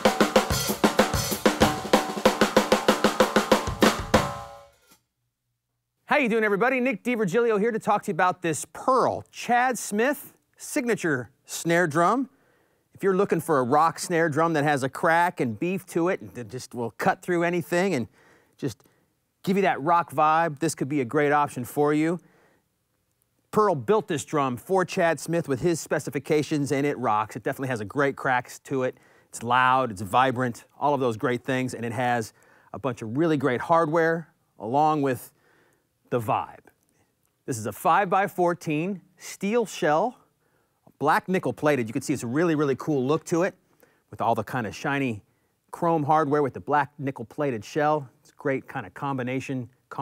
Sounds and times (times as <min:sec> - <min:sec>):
Speech: 0:06.0 - 0:12.3, 0:13.0 - 0:18.8, 0:19.4 - 0:22.2, 0:23.5 - 0:35.4, 0:36.1 - 0:36.8, 0:37.4 - 0:40.2, 0:41.0 - 0:50.0.